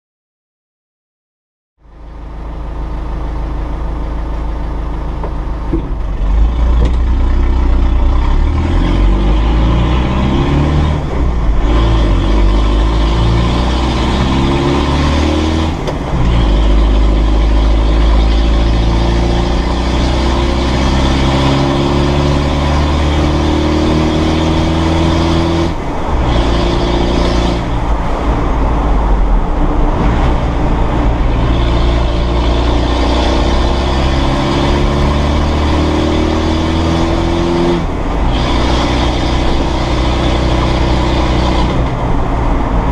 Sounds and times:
Car: 1.8 - 42.9
Accelerating, revving, vroom: 6.3 - 42.9.

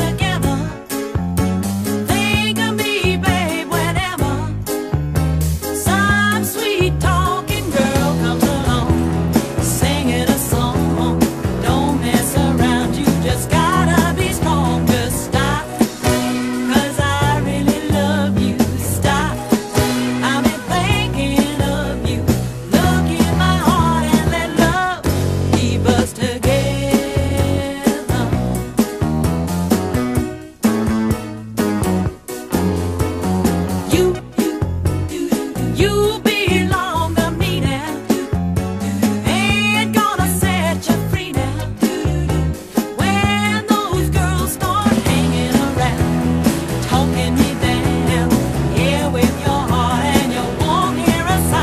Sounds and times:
Rock music: 0.0 - 51.6.

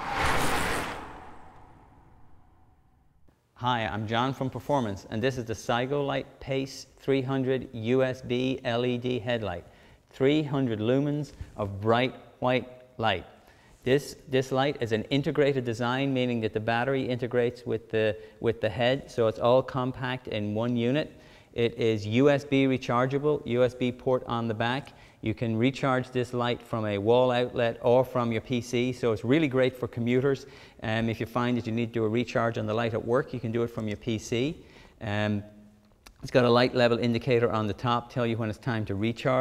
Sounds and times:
Speech: 3.6 - 39.4.

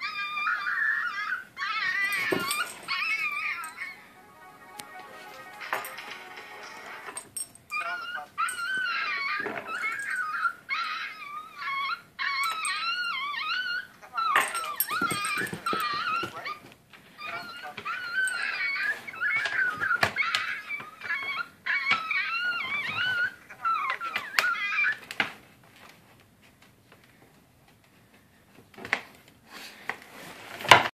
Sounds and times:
Whimper (dog): 0.0 - 4.1, 7.7 - 25.1
Yip: 7.7 - 16.6, 17.2 - 25.0.

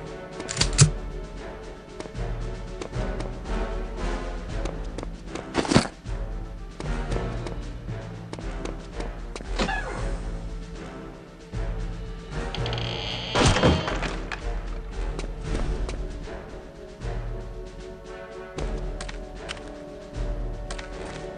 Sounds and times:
Music: 0.0 - 21.3.

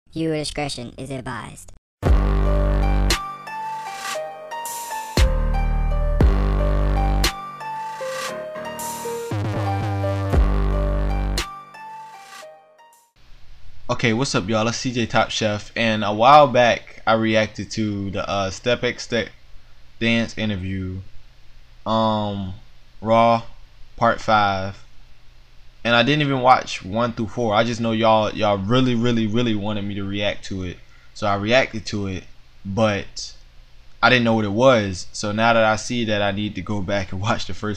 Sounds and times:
Speech: 0.1 - 1.8, 13.9 - 19.4, 20.0 - 21.1, 21.9 - 24.9, 25.9 - 33.4, 34.0 - 37.7
Music: 2.0 - 13.2.

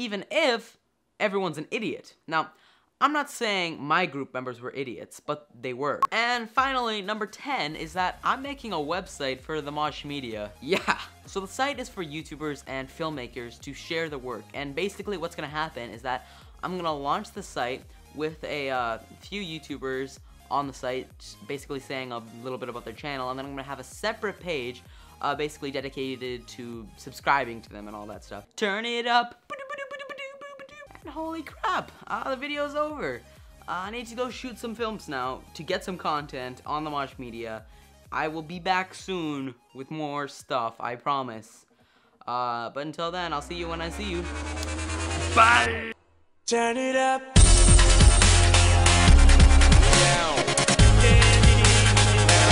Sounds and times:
Dubstep: 43.3 - 46.0, 47.4 - 52.5.

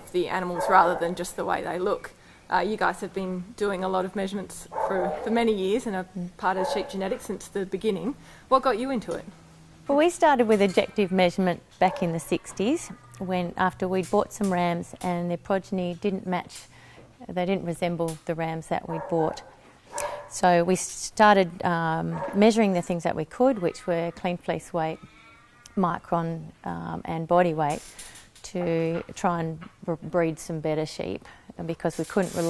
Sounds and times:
Speech: 0.0 - 9.3, 9.9 - 16.6, 17.2 - 19.4, 20.3 - 25.1, 25.7 - 27.8, 28.4 - 32.5.

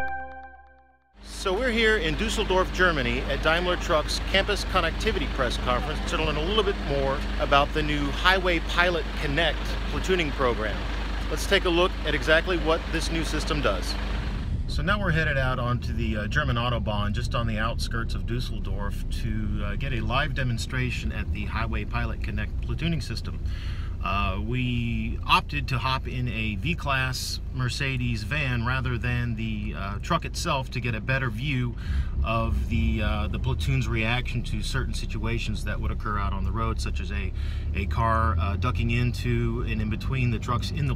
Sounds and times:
Car: 1.2 - 40.9
Speech: 1.3 - 14.0, 14.7 - 40.9.

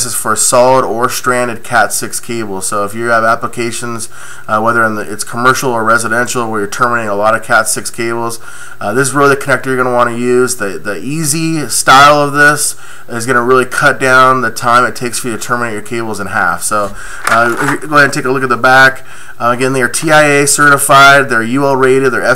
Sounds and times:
Speech: 0.0 - 22.3.

